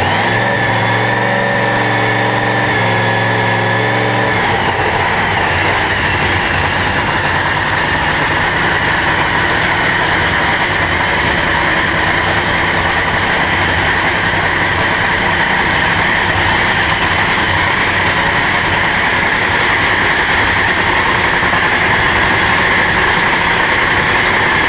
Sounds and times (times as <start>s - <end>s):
Vehicle: 0.0s - 24.6s.